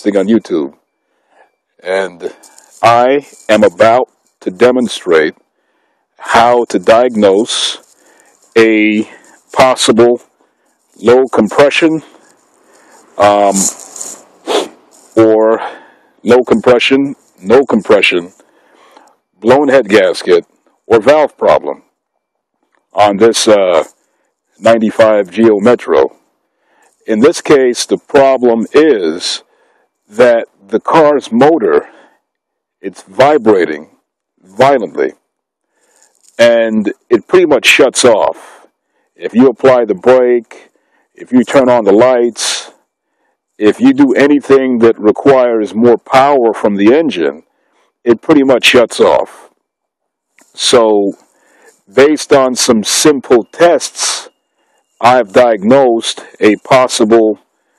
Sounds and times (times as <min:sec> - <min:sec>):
Speech: 0:00.0 - 0:00.8, 0:01.8 - 0:05.4, 0:06.2 - 0:10.3, 0:11.0 - 0:12.2, 0:13.2 - 0:18.4, 0:19.4 - 0:21.8, 0:23.0 - 0:23.9, 0:24.6 - 0:26.1, 0:27.0 - 0:29.4, 0:30.1 - 0:32.0, 0:32.8 - 0:33.9, 0:34.5 - 0:35.2, 0:36.3 - 0:42.8, 0:43.6 - 0:47.4, 0:48.1 - 0:49.5, 0:50.5 - 0:54.3, 0:55.0 - 0:57.4.